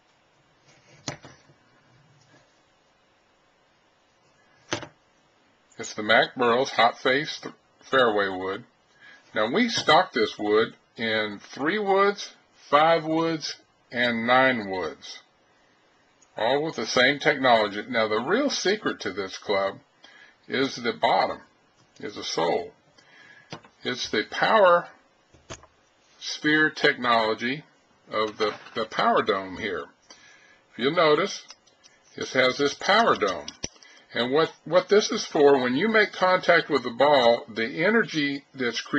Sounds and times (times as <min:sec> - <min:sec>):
Speech: 0:05.8 - 0:08.7, 0:09.3 - 0:15.3, 0:16.4 - 0:19.8, 0:20.5 - 0:22.8, 0:23.8 - 0:25.0, 0:26.2 - 0:30.0, 0:30.8 - 0:38.9.